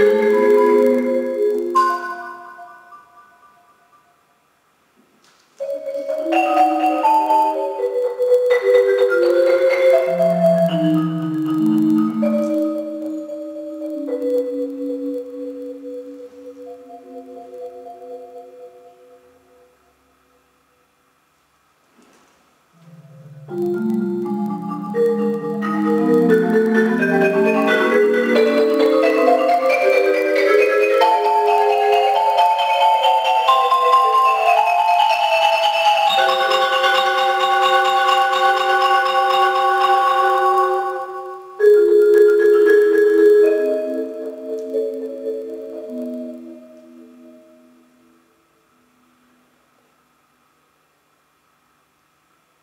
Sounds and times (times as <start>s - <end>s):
Marimba, xylophone: 0.0s - 4.2s, 5.6s - 19.8s, 22.8s - 48.3s.